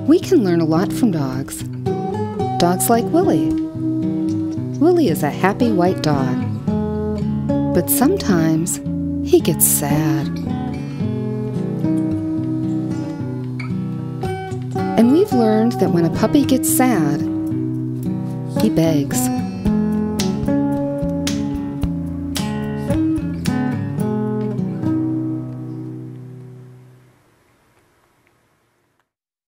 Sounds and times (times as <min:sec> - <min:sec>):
Music: 0:00.0 - 0:27.1.